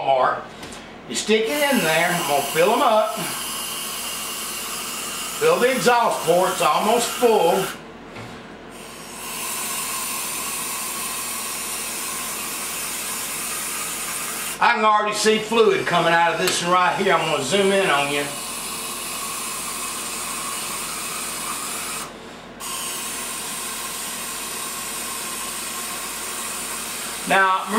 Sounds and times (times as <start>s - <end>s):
Speech: 0.0s - 0.5s, 1.1s - 3.4s, 5.4s - 7.8s, 14.6s - 18.4s, 27.2s - 27.7s.